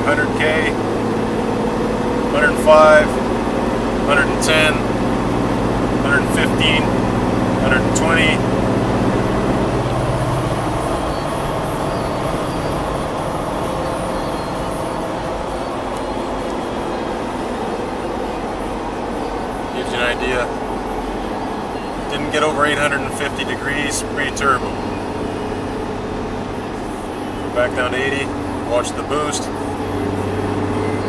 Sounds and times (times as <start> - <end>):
Speech: 0.0 - 0.8, 2.3 - 3.2, 4.1 - 4.9, 6.0 - 6.9, 7.6 - 8.4, 19.8 - 20.5, 22.1 - 24.7, 27.6 - 29.5.